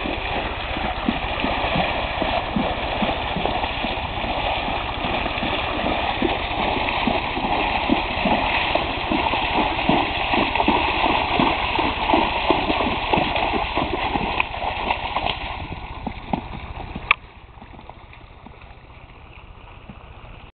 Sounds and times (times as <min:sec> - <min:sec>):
Clip-clop: 0:00.0 - 0:20.5.